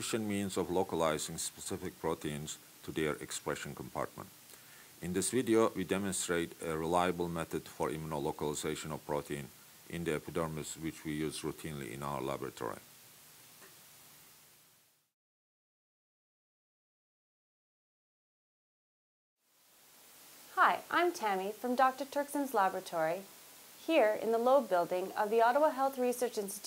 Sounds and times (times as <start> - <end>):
Speech: 0.0 - 4.3, 5.0 - 12.8, 20.6 - 26.6.